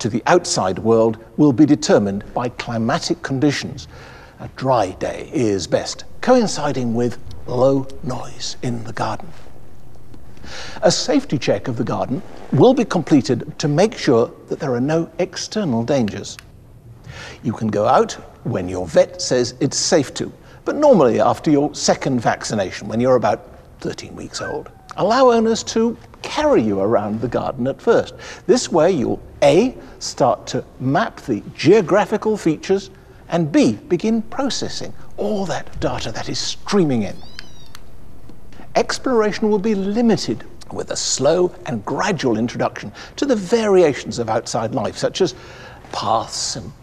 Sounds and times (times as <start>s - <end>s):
Speech: 0.0s - 9.4s, 10.8s - 16.4s, 17.4s - 37.2s, 38.8s - 46.8s.